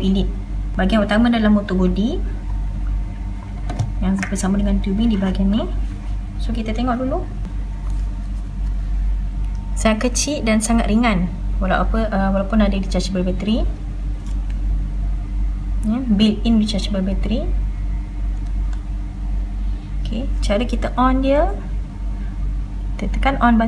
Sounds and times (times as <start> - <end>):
Speech: 0.0 - 2.3, 4.0 - 5.8, 6.4 - 7.3, 9.8 - 13.8, 15.8 - 17.6, 20.0 - 21.7, 23.0 - 23.6.